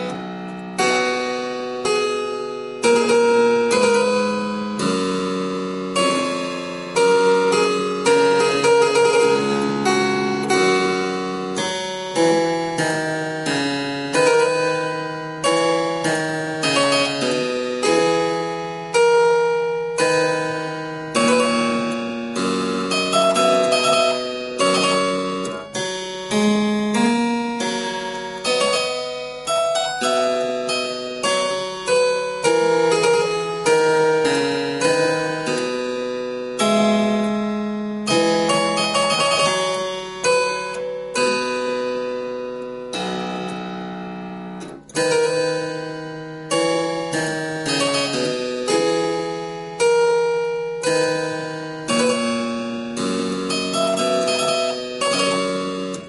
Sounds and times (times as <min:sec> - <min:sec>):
Harpsichord: 0:00.0 - 0:56.0.